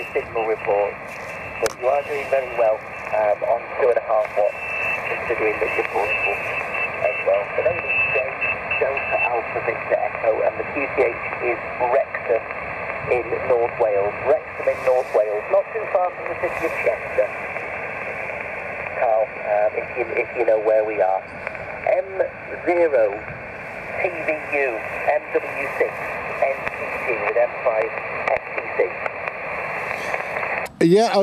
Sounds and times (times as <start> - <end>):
Speech: 0.0 - 1.0, 1.6 - 6.4, 7.0 - 12.4, 13.0 - 17.4, 19.0 - 21.2, 21.9 - 23.2, 24.0 - 29.0, 30.7 - 31.2.